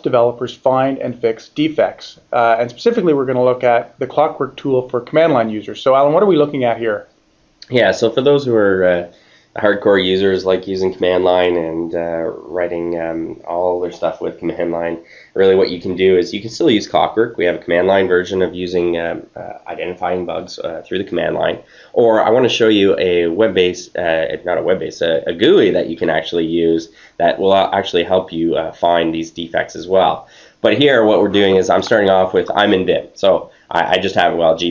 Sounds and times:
Speech: 0.0s - 34.7s.

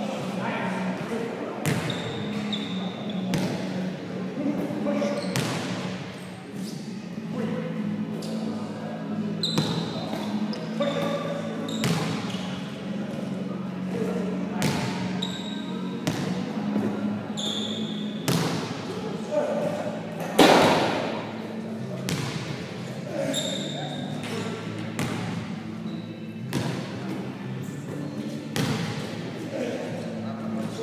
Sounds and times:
Speech: 0.0s - 5.4s, 6.5s - 17.4s, 18.8s - 24.8s, 29.4s - 30.8s.

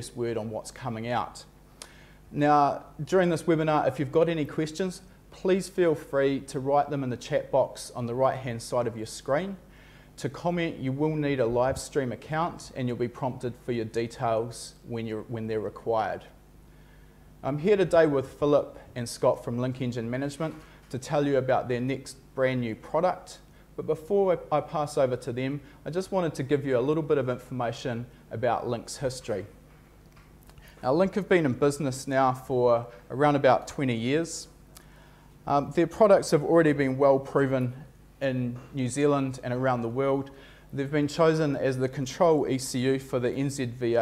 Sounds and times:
Speech: 0.0s - 1.5s, 2.3s - 9.6s, 10.2s - 16.4s, 17.4s - 29.6s, 30.8s - 34.6s, 35.4s - 44.0s.

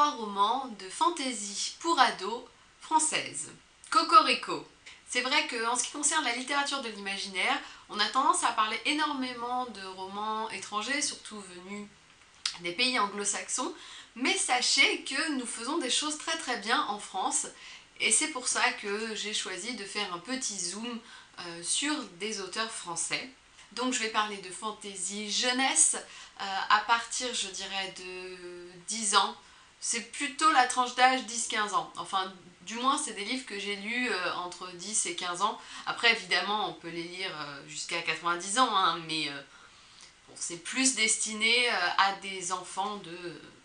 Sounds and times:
Speech: 0.0s - 11.9s, 12.5s - 39.5s, 40.3s - 43.6s.

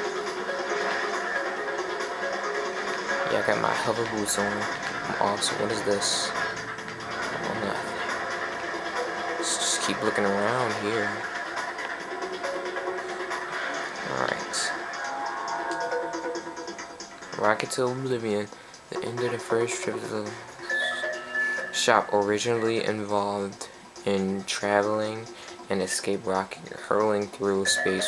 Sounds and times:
Music: 0.0s - 28.0s
Speech: 3.3s - 6.3s, 21.8s - 28.0s.

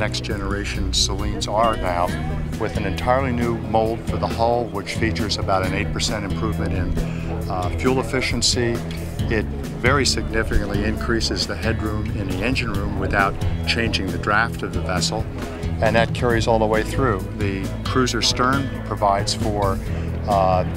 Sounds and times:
Music: 0.0s - 20.7s
Speech: 0.0s - 20.7s.

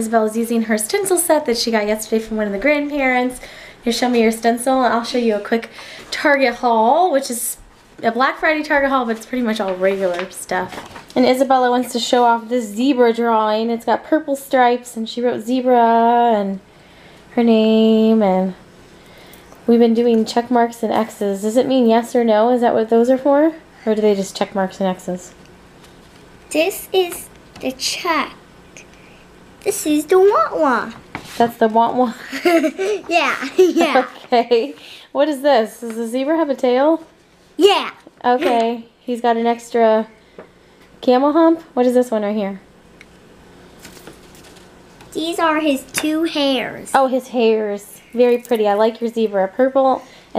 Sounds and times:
Child speech, kid speaking: 26.5s - 28.4s, 29.6s - 31.0s, 32.8s - 34.4s, 37.6s - 38.6s, 45.1s - 47.1s.

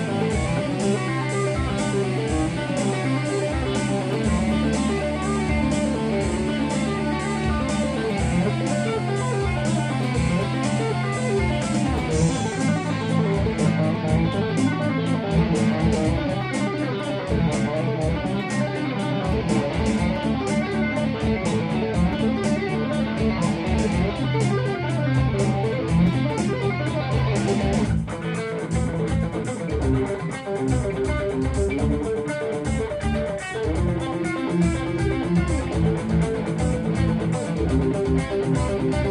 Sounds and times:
Heavy metal: 0.0s - 39.1s
Tapping (guitar technique): 0.0s - 39.1s.

